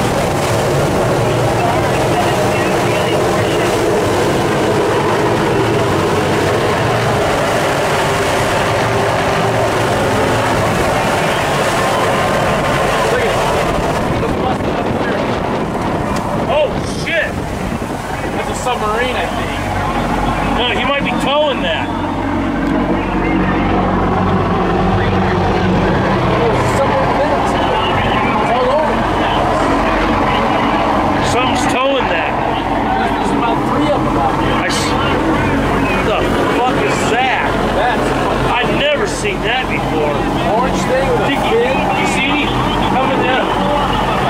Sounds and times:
Speech: 0:01.4 - 0:04.0, 0:12.6 - 0:15.4, 0:18.3 - 0:21.9, 0:22.8 - 0:44.2.

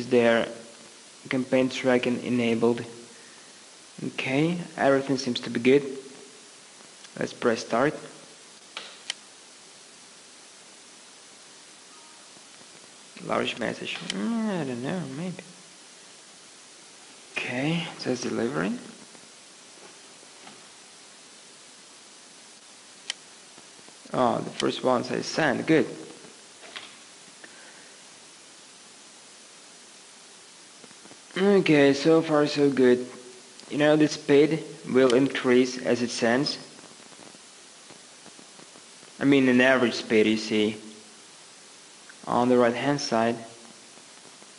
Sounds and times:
White noise: 0:00.0 - 0:44.5.

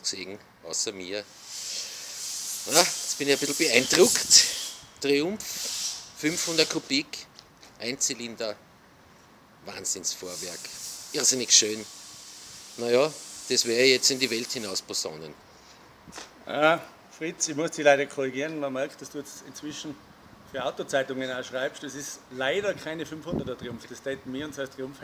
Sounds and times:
Speech: 0:00.0 - 0:01.3, 0:02.7 - 0:04.4, 0:05.0 - 0:05.4, 0:06.2 - 0:08.6, 0:09.6 - 0:11.9, 0:12.8 - 0:15.4, 0:16.5 - 0:25.0.

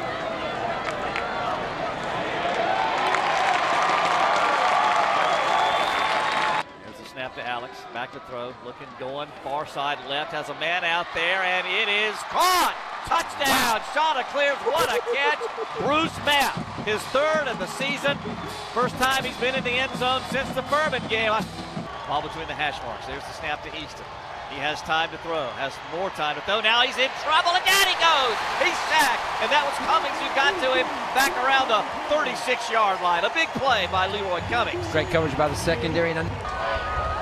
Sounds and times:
Speech: 0:06.8 - 0:18.2, 0:18.8 - 0:21.5, 0:22.1 - 0:36.3.

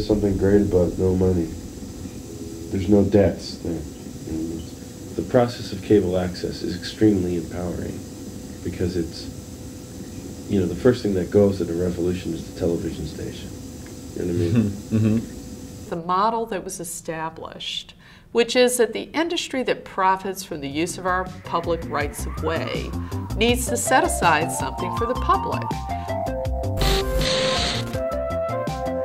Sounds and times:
Speech: 0:00.0 - 0:01.5, 0:02.8 - 0:08.0, 0:08.7 - 0:09.3, 0:10.5 - 0:13.5, 0:14.2 - 0:15.2, 0:15.9 - 0:25.7
Music: 0:00.0 - 0:05.7, 0:20.6 - 0:29.0
Inside, small room: 0:10.0 - 0:26.1.

